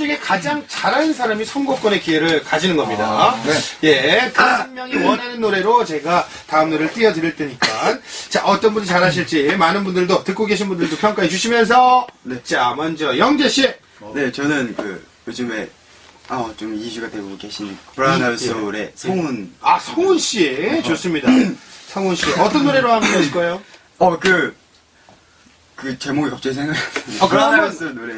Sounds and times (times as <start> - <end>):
Speech: 0.0 - 15.7, 16.3 - 24.6, 25.8 - 28.1.